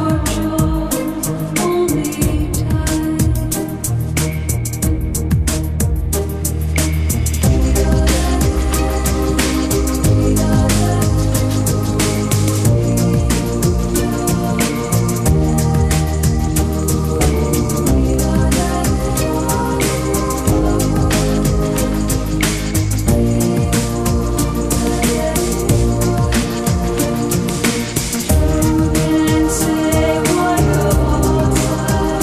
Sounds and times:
Music: 0:00.0 - 0:32.2.

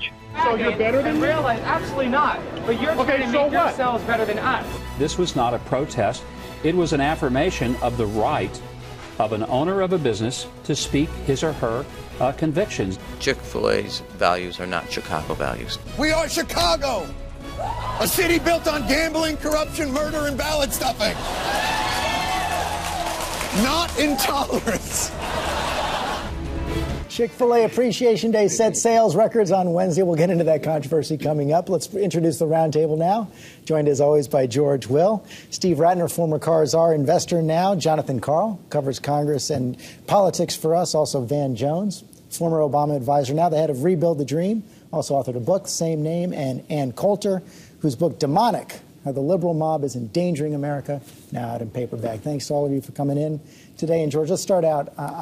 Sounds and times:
Music: 0:00.0 - 0:28.3.

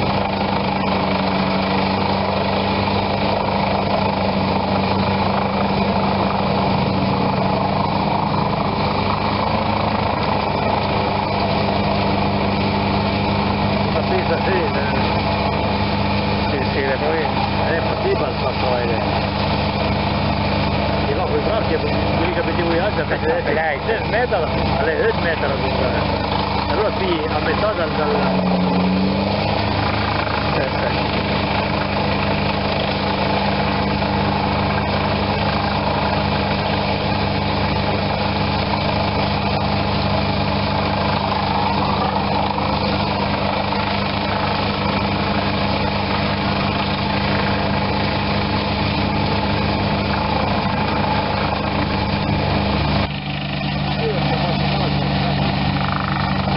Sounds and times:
Idling: 0:00.0 - 0:56.5
Medium engine (mid frequency): 0:00.0 - 0:56.5
Vehicle: 0:00.0 - 0:56.5
Speech: 0:14.0 - 0:15.2, 0:16.5 - 0:19.2, 0:21.0 - 0:26.1, 0:26.7 - 0:28.4, 0:53.9 - 0:55.4.

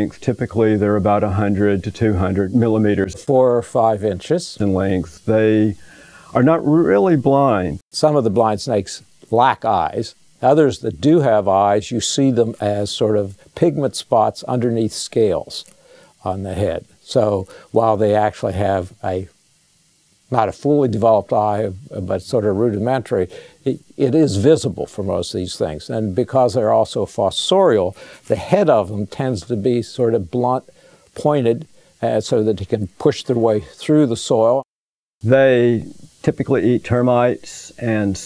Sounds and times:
Speech: 0:00.0 - 0:05.8, 0:06.4 - 0:19.4, 0:20.3 - 0:38.2
Inside, small room: 0:00.0 - 0:38.2.

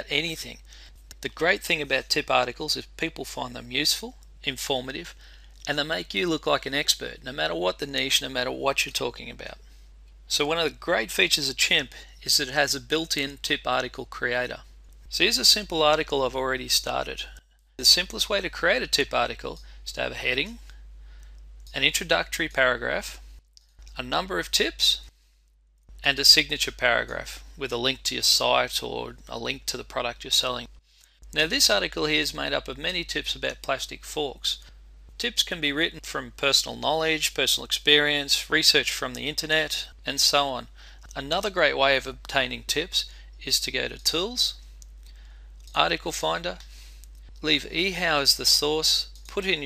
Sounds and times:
Speech: 0:00.0 - 0:09.6, 0:10.3 - 0:20.6, 0:21.7 - 0:23.2, 0:23.9 - 0:25.1, 0:26.0 - 0:30.7, 0:31.3 - 0:44.6, 0:45.7 - 0:46.6, 0:47.4 - 0:49.6.

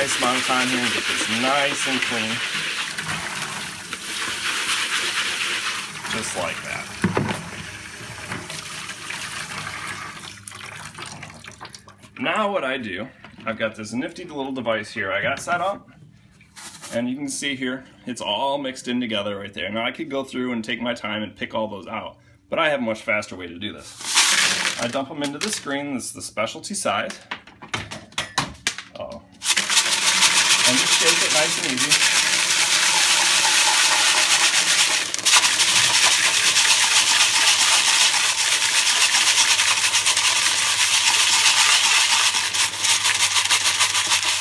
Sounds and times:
Water tap, faucet: 0:00.0 - 0:12.0, 0:29.5 - 0:44.4
Sink (filling or washing): 0:00.0 - 0:12.1, 0:29.4 - 0:44.4
Water: 0:08.3 - 0:12.2.

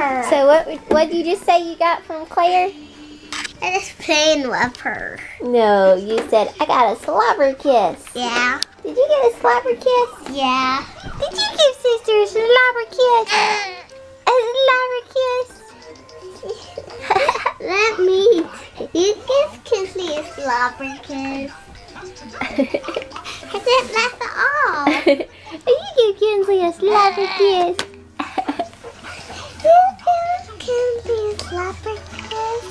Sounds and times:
Music: 0:00.0 - 0:32.7
Child speech, kid speaking: 0:03.6 - 0:15.7, 0:17.6 - 0:21.6, 0:23.5 - 0:24.9, 0:25.7 - 0:27.8, 0:29.6 - 0:32.7.

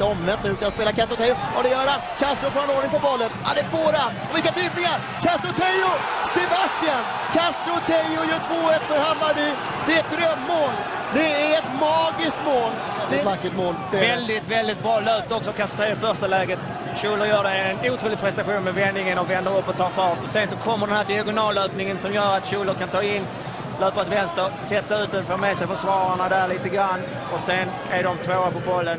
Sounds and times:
Speech: 0:00.0 - 0:28.9.

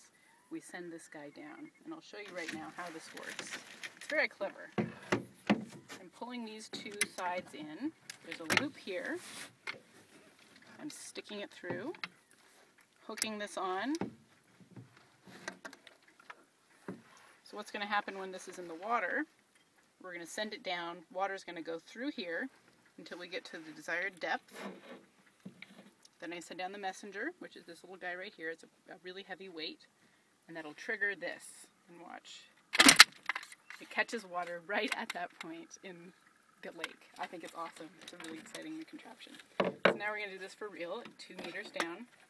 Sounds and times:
Speech: 0:00.5 - 0:04.8, 0:06.0 - 0:09.2, 0:10.8 - 0:12.0, 0:20.0 - 0:24.4, 0:26.2 - 0:29.9, 0:30.5 - 0:32.5, 0:33.8 - 0:42.1.

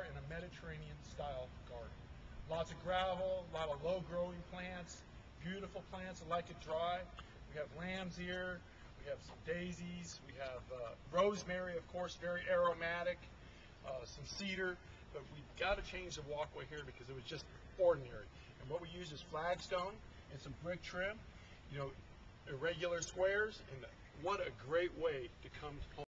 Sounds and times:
Speech: 0:00.0 - 0:26.0.

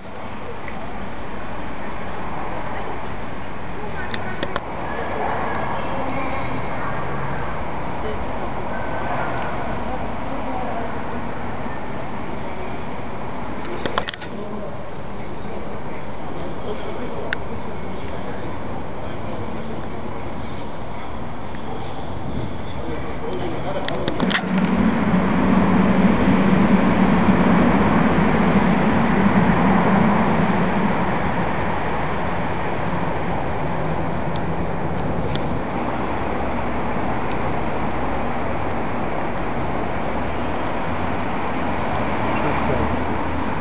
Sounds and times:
Speech: 0:00.0 - 0:24.5, 0:42.3 - 0:43.0.

